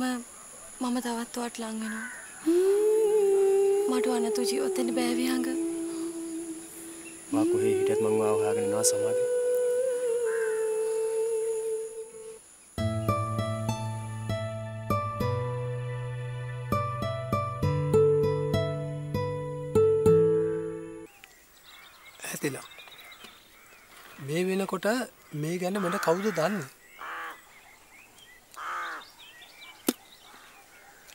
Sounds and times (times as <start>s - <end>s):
Outside, rural or natural: 0.0s - 31.1s
Music: 12.8s - 21.1s.